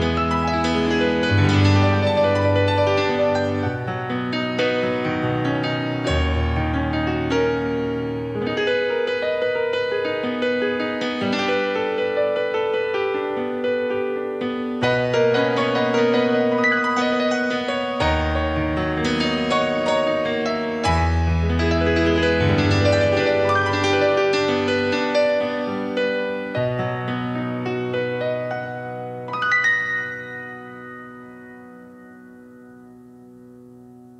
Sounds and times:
Electric piano: 0.0 - 34.1.

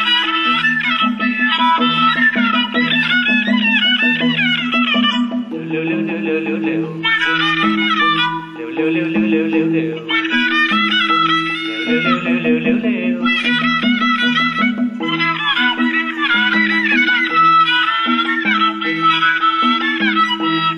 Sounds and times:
Musical instrument: 0.0 - 20.7.

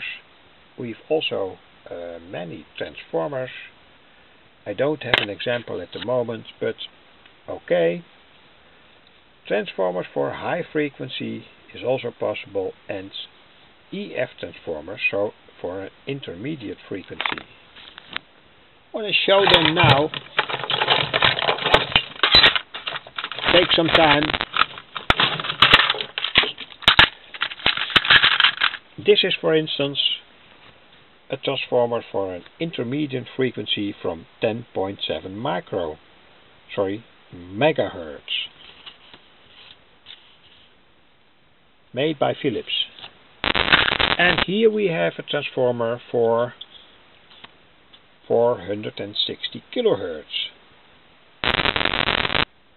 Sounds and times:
Speech: 0.0 - 0.2, 0.8 - 3.8, 4.6 - 8.1, 9.4 - 13.3, 13.9 - 17.4, 19.0 - 20.2, 23.5 - 24.4, 29.0 - 30.3, 31.3 - 36.0, 36.7 - 38.6, 41.9 - 43.0, 44.2 - 46.6, 48.3 - 50.6
Inside, small room: 0.0 - 52.7.

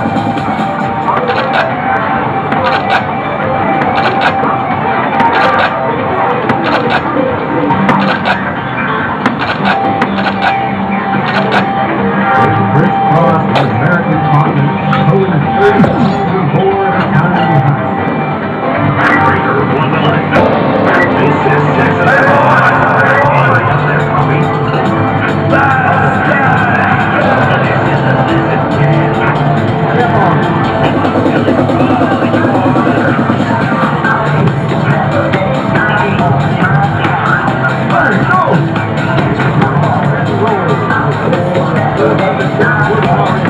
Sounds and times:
Music: 0.0 - 43.5
Speech: 12.4 - 17.8, 19.0 - 24.6, 25.5 - 43.5.

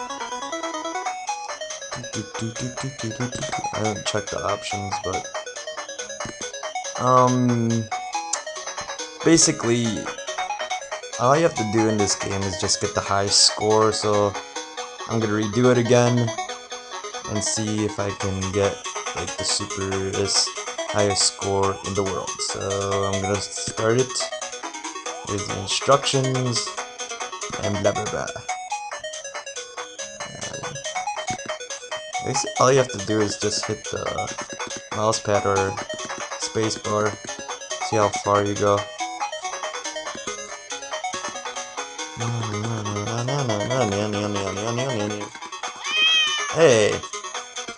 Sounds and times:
Music: 0.0 - 47.7
Speech: 2.0 - 5.2, 7.0 - 7.9, 9.2 - 10.1, 11.2 - 14.4, 15.1 - 16.4, 17.3 - 24.3, 25.2 - 26.7, 27.5 - 28.4, 30.3 - 30.8, 32.2 - 37.3, 37.9 - 38.8, 42.2 - 45.3, 46.5 - 47.1.

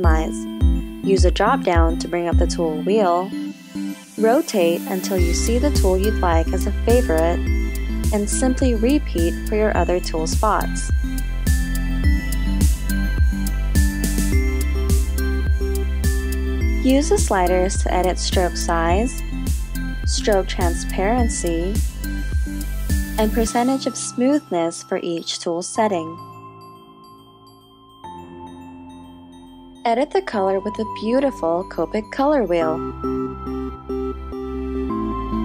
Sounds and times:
Speech: 0.0 - 0.4, 1.1 - 3.3, 4.2 - 7.4, 8.1 - 10.9, 16.9 - 19.2, 20.1 - 21.8, 23.2 - 26.2, 29.9 - 32.9
Music: 0.0 - 35.4.

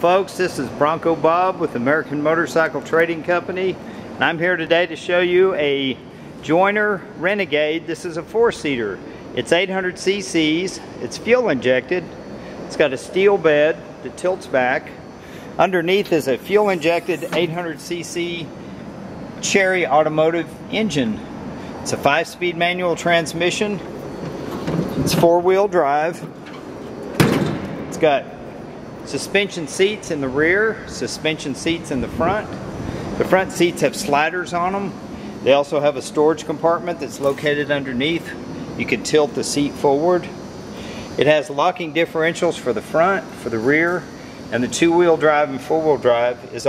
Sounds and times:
Speech: 0.0 - 12.1, 12.7 - 15.0, 15.6 - 18.5, 19.4 - 23.8, 25.1 - 26.3, 27.9 - 28.3, 29.0 - 32.6, 33.2 - 40.4, 41.2 - 46.6.

